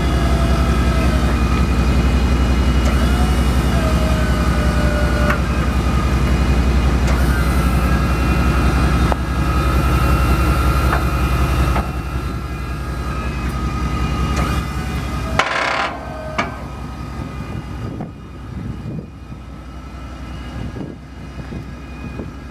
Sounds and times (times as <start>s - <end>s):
Vehicle: 0.0s - 22.5s.